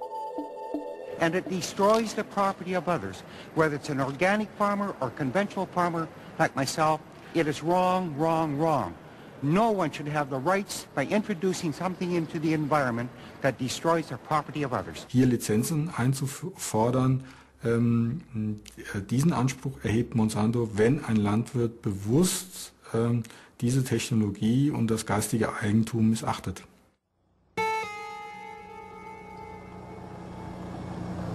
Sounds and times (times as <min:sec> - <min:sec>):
Speech: 0:01.2 - 0:26.7.